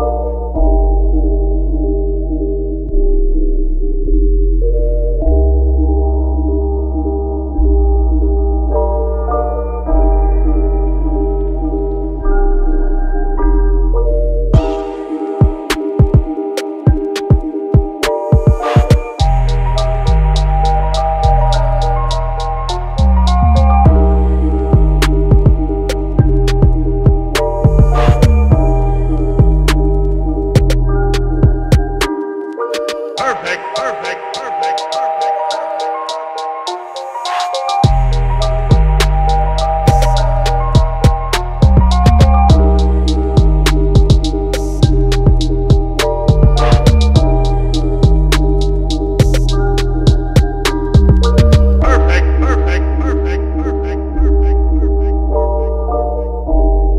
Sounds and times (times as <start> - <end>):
Music: 0.0 - 56.9.